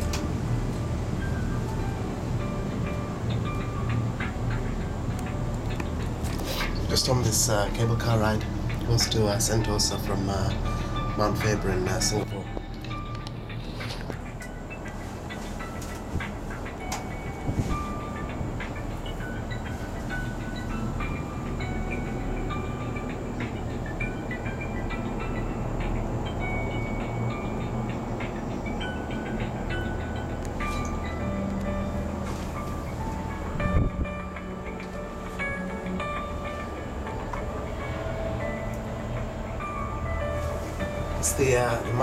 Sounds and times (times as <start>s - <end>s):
Music: 0.0s - 42.0s.